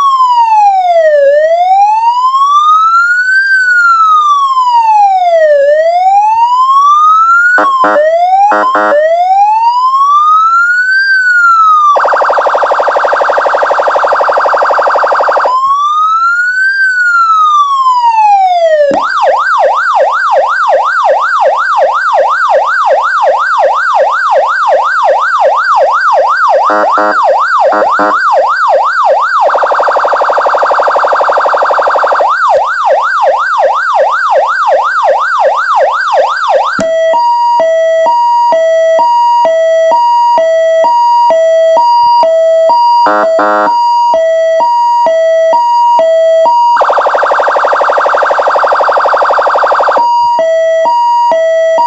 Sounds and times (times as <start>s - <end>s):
Police car (siren): 0.0s - 51.8s.